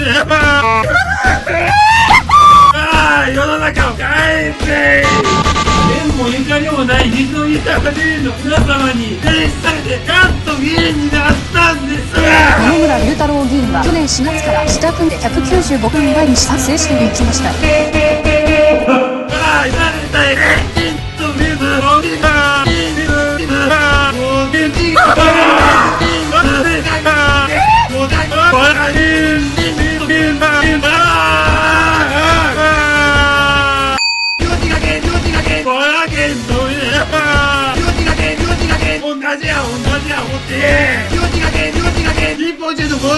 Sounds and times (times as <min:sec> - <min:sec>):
Music: 0:00.0 - 0:43.1.